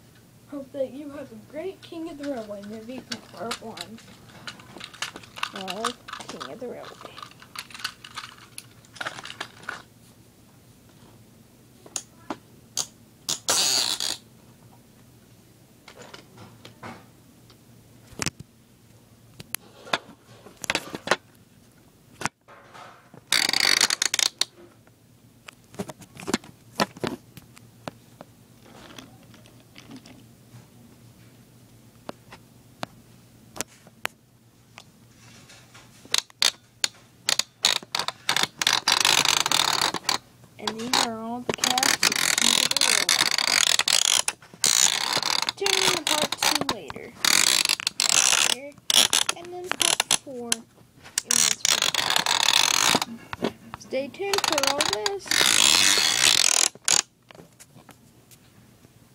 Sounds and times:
Inside, small room: 0.0 - 59.1
Speech: 0.5 - 4.0, 5.5 - 7.2, 40.6 - 43.2, 45.6 - 47.2, 48.4 - 50.7, 51.3 - 51.8, 53.8 - 55.3.

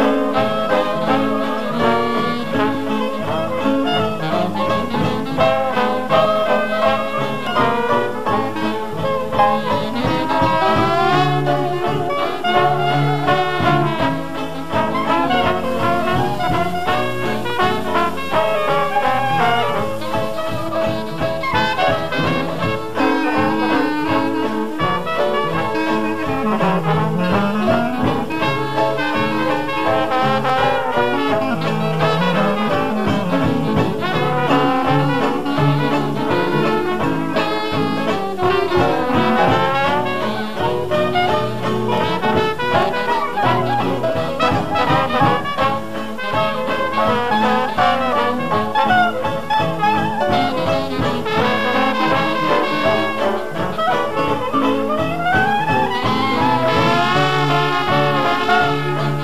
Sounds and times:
Trombone: 0.0 - 59.2
Trumpet: 0.0 - 59.2.

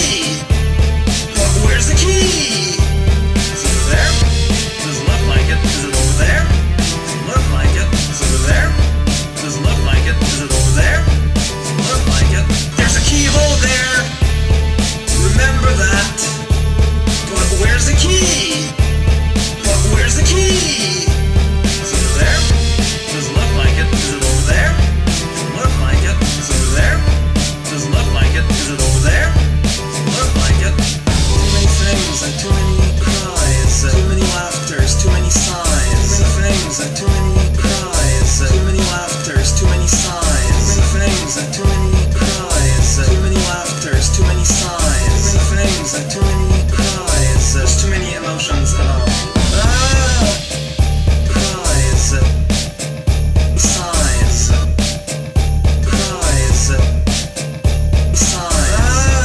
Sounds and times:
Music: 0.0 - 59.2.

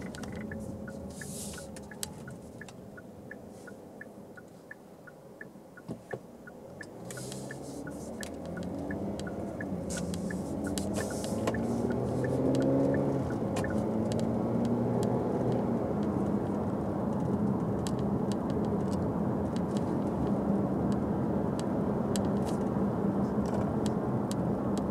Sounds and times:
Car: 0.0 - 24.9
Outside, rural or natural: 0.0 - 24.9.

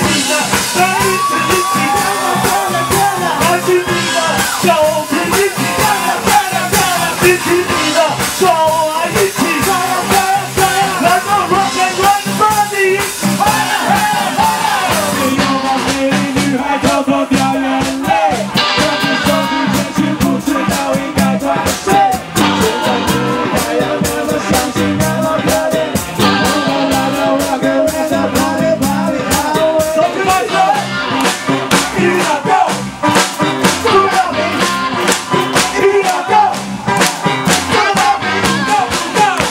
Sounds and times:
Heavy metal: 0.0 - 39.5
Rock and roll: 0.0 - 39.5
Ska: 0.0 - 39.5.

